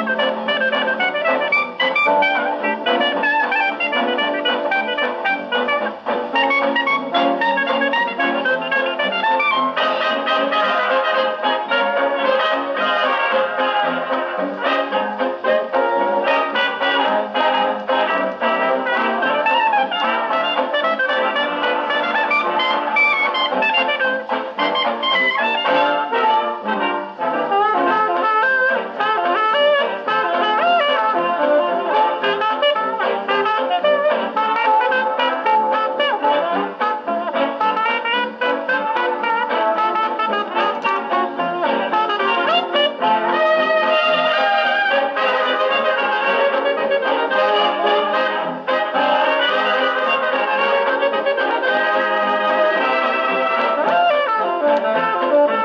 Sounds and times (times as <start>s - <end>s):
Trombone: 0.0s - 55.6s.